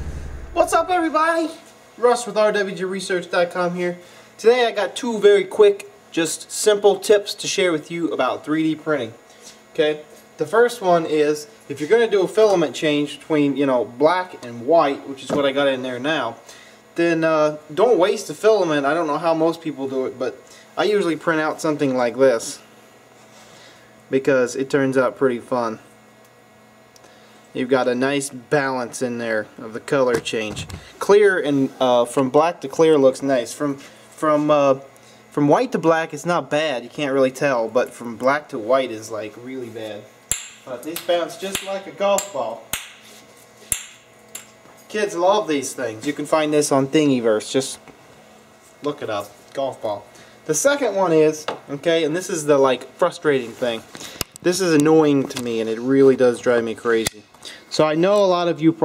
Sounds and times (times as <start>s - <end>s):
Speech: 0.6s - 16.4s, 17.0s - 22.7s, 24.1s - 25.9s, 27.5s - 42.7s, 44.9s - 47.9s, 48.8s - 58.8s.